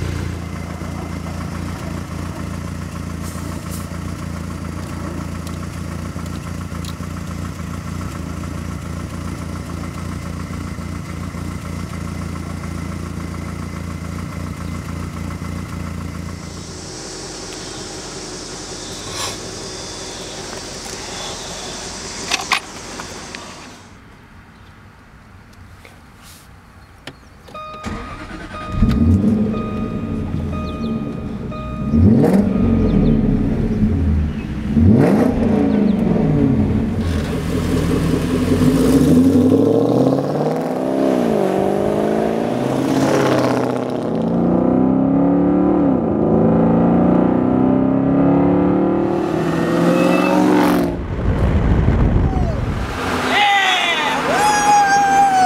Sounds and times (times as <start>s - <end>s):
Car: 0.0s - 55.4s
Outside, urban or manmade: 0.0s - 55.4s.